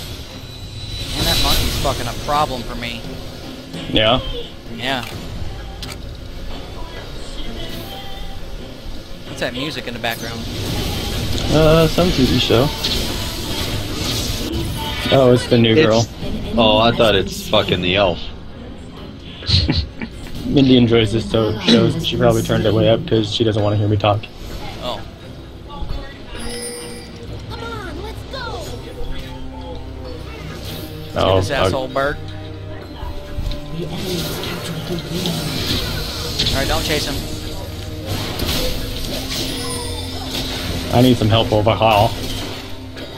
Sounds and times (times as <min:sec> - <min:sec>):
Music: 0:00.0 - 0:43.1.